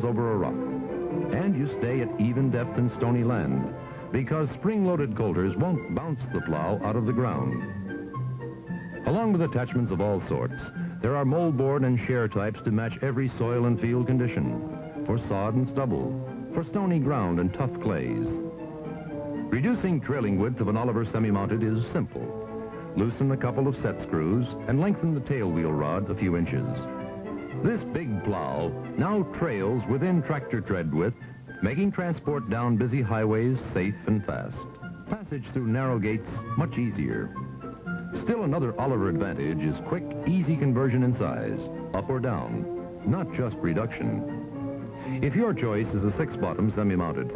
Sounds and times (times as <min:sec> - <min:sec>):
Speech: 0:00.0 - 0:00.7, 0:01.3 - 0:07.7, 0:09.0 - 0:18.4, 0:19.5 - 0:26.9, 0:27.6 - 0:37.4, 0:38.2 - 0:44.3, 0:45.0 - 0:47.3
Music: 0:00.0 - 0:47.3.